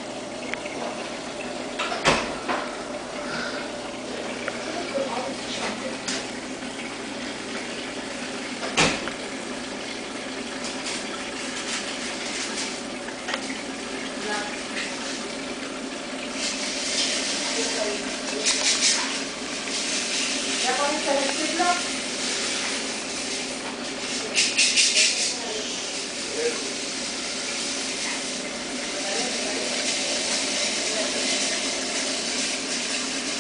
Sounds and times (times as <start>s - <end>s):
Boiling: 0.0s - 33.4s.